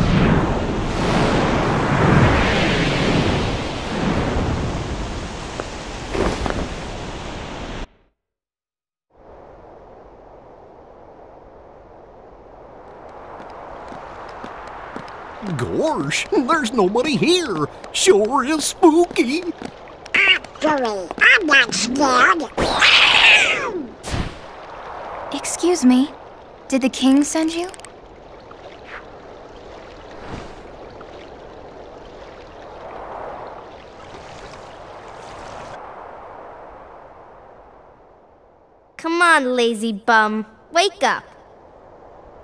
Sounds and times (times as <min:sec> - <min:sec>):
Speech: 0:15.4 - 0:19.6, 0:20.2 - 0:22.8, 0:25.4 - 0:26.1, 0:26.7 - 0:27.8, 0:39.0 - 0:41.3.